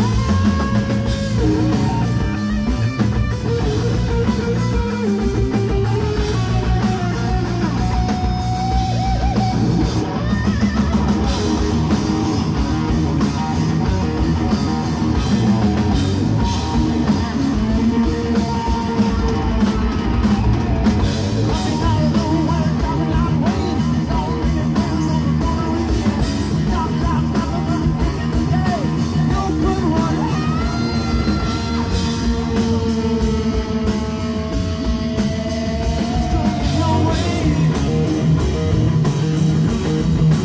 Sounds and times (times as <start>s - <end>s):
Heavy metal: 0.0s - 40.4s
Vocal music: 21.4s - 34.3s, 35.5s - 38.5s.